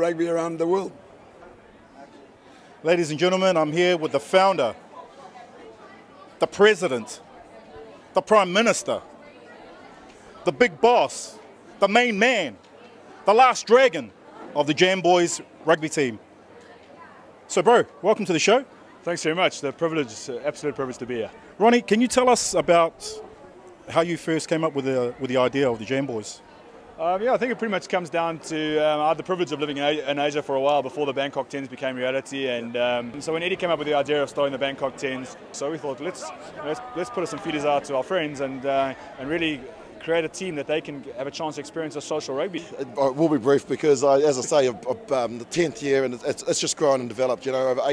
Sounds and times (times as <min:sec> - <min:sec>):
Male speech, man speaking: 0:00.0 - 0:01.0, 0:02.8 - 0:04.8, 0:06.4 - 0:07.2, 0:08.2 - 0:09.0, 0:10.4 - 0:12.6, 0:13.2 - 0:16.2, 0:17.5 - 0:23.2, 0:23.9 - 0:26.4, 0:27.0 - 0:47.9.